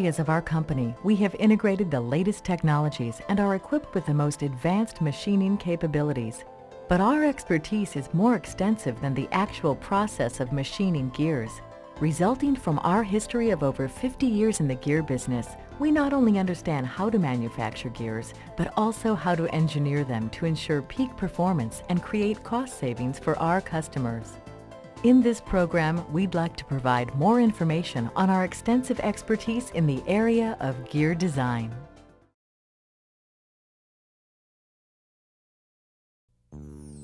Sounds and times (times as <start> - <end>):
Speech: 0.0 - 24.4, 25.0 - 31.8
Music: 0.0 - 32.4, 36.4 - 37.0.